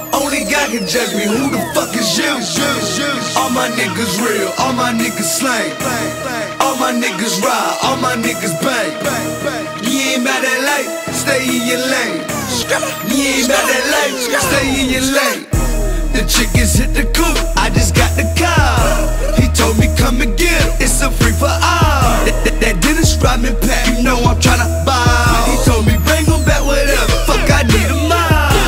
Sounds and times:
Music: 0.0s - 28.6s.

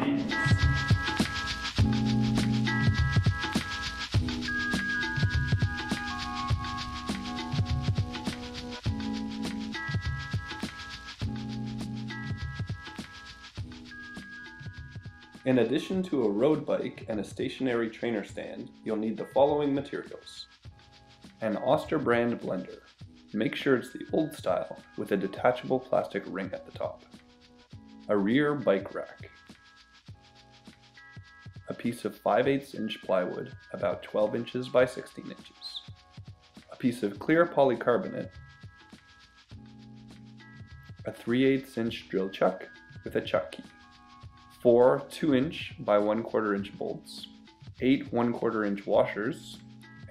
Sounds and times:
Music: 0.0s - 50.1s
Speech: 15.5s - 20.5s, 21.4s - 22.8s, 23.4s - 27.0s, 28.1s - 29.3s, 31.7s - 35.9s, 36.7s - 38.3s, 41.1s - 43.7s, 44.6s - 49.6s.

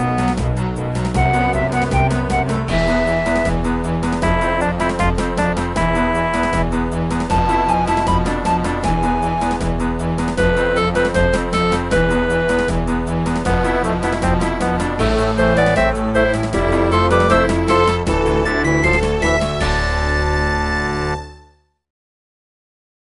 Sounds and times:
Theme music: 0.0s - 21.6s.

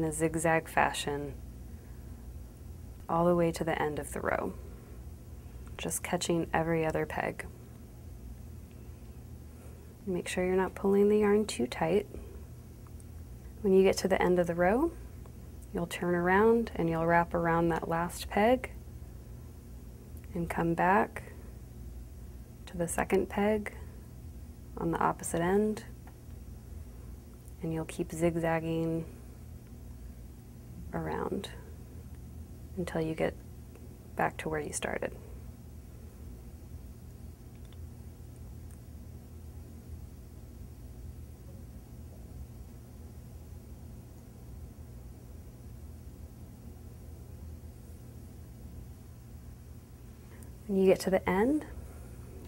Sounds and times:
Speech: 0.0s - 1.4s, 3.1s - 4.6s, 5.8s - 7.5s, 10.0s - 12.2s, 13.6s - 15.0s, 15.7s - 18.8s, 20.3s - 21.3s, 22.7s - 23.8s, 24.8s - 25.9s, 27.6s - 29.1s, 30.9s - 31.6s, 32.8s - 33.4s, 34.2s - 35.2s, 50.7s - 51.8s
Inside, small room: 0.0s - 52.4s.

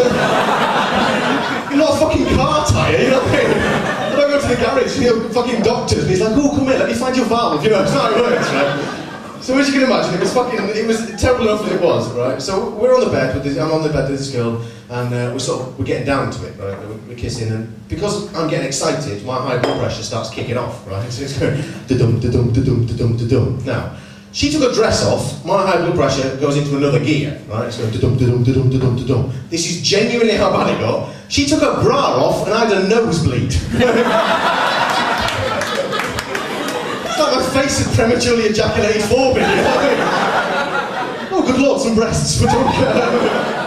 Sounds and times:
Speech: 1.6s - 33.9s, 35.3s - 40.0s, 41.3s - 43.3s.

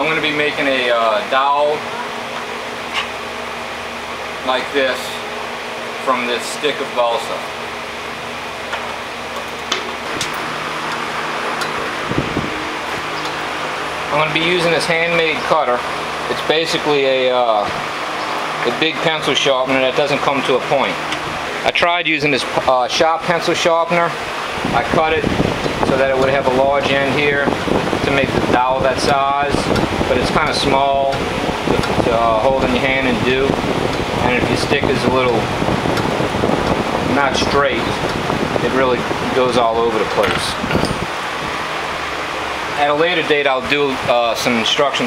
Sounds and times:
Speech: 0.0s - 2.1s, 4.4s - 5.2s, 6.0s - 7.5s, 14.1s - 17.8s, 18.6s - 21.0s, 21.6s - 33.6s, 34.2s - 35.5s, 37.1s - 38.0s, 38.6s - 40.6s, 42.8s - 45.0s.

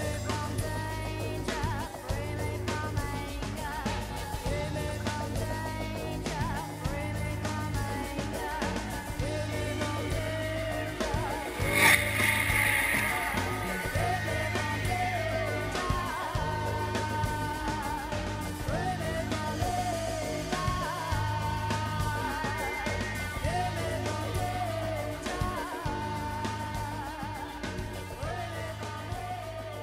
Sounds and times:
Music: 0.0s - 29.8s.

